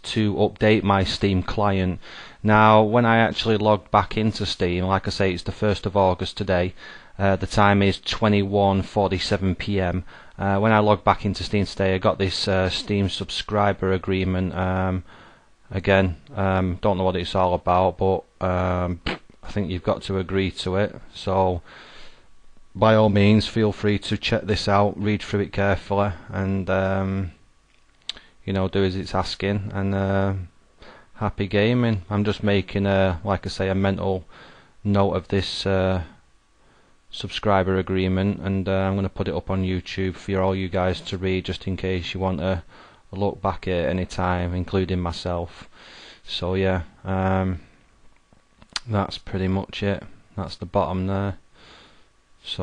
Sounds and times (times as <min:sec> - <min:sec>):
Speech: 0:00.0 - 0:15.1, 0:15.7 - 0:21.6, 0:22.8 - 0:27.4, 0:28.4 - 0:30.5, 0:31.2 - 0:36.2, 0:37.1 - 0:47.7, 0:48.8 - 0:51.4, 0:52.4 - 0:52.6.